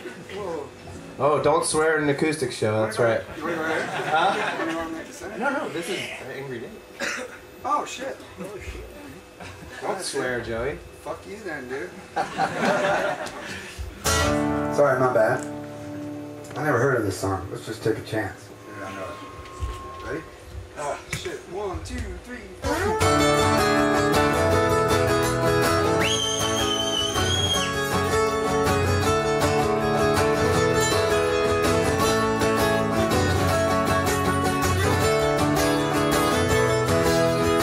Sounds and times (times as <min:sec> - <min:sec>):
Musical instrument: 0:18.5 - 0:20.6.